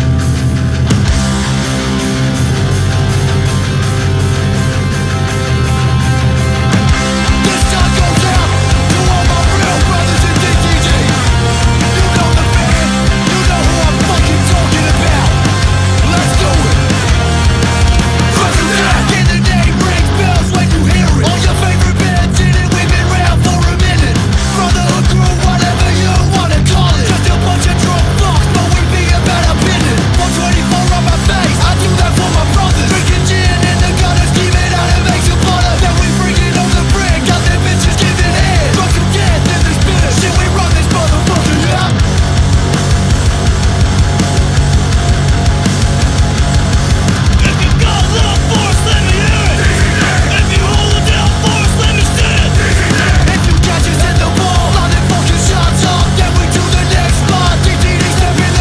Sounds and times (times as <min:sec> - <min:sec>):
Heavy metal: 0:00.0 - 0:58.6.